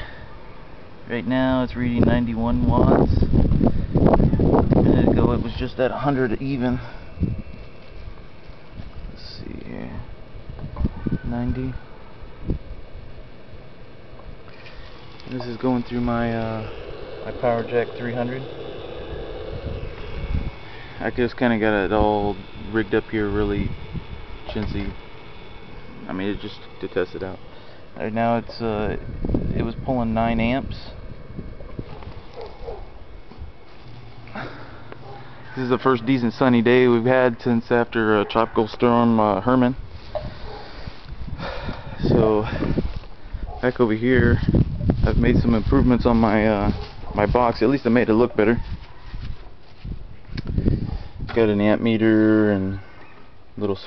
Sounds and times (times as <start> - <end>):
Speech: 1.1 - 3.2, 4.9 - 6.9, 11.2 - 11.8, 15.3 - 18.6, 21.0 - 23.7, 26.0 - 27.4, 28.0 - 31.0, 35.6 - 39.8, 42.0 - 42.6, 43.6 - 44.4, 45.0 - 48.6, 51.3 - 52.8, 53.6 - 53.8.